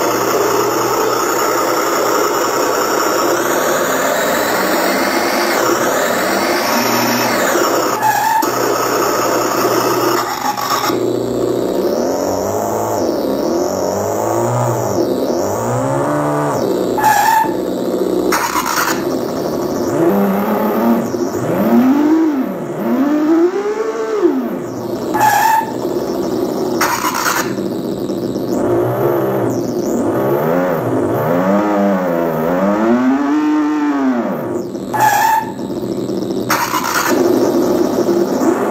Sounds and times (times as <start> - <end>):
Car: 0.0 - 38.7.